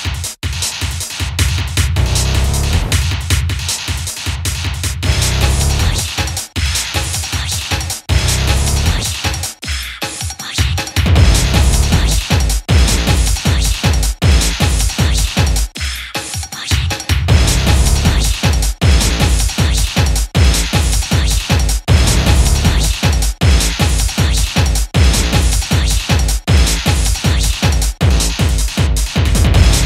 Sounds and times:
Techno: 0.0s - 29.8s.

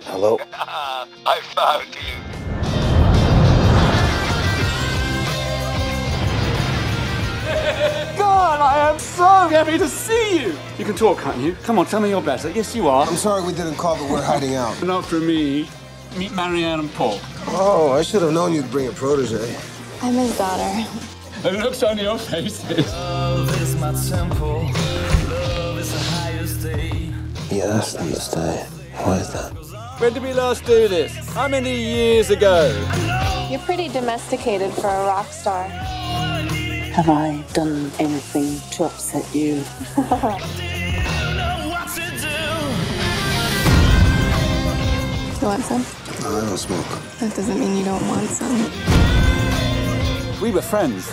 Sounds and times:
Music: 0.0s - 51.1s.

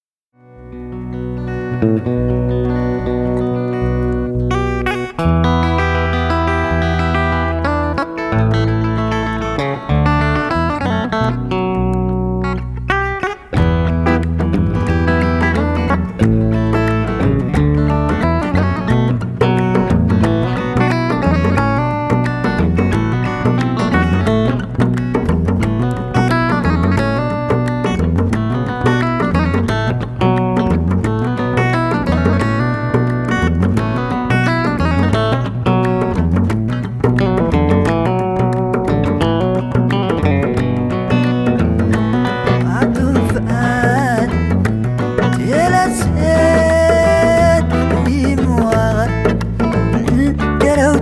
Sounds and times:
Music: 0.3s - 51.0s.

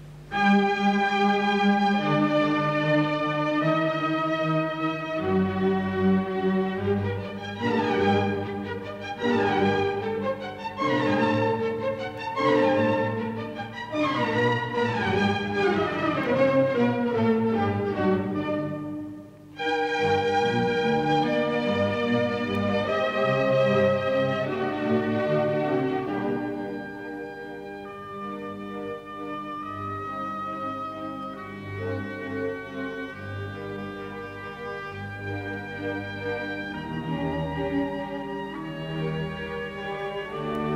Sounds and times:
Orchestra: 0.0s - 40.7s.

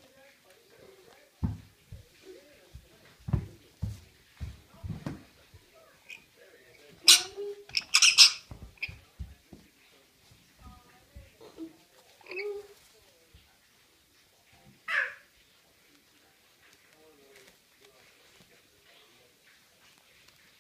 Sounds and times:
Speech: 8.6s - 20.6s.

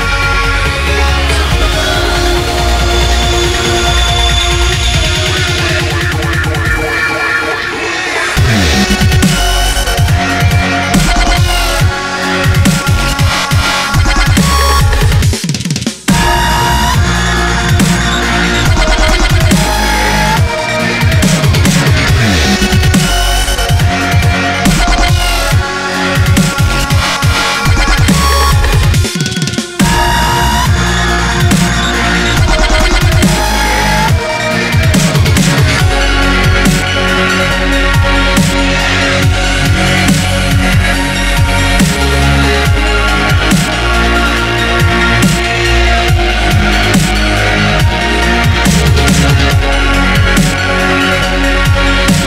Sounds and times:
Drum and bass: 0.0s - 52.2s.

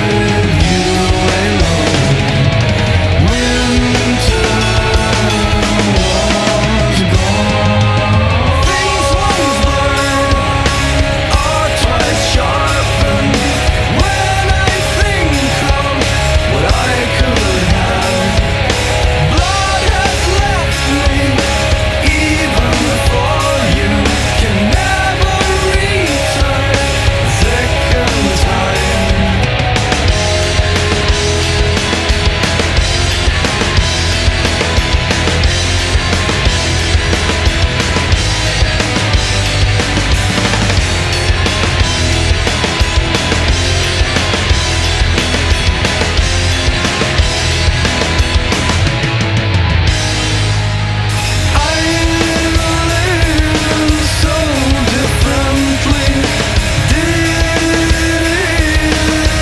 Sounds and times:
Music: 0.0s - 59.4s.

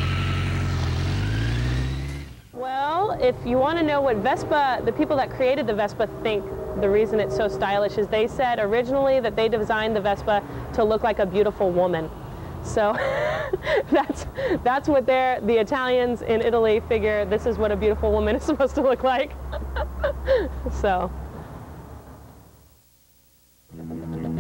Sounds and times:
Motorcycle: 0.0s - 10.8s
Speech: 2.6s - 12.1s, 14.6s - 19.4s, 20.7s - 21.1s.

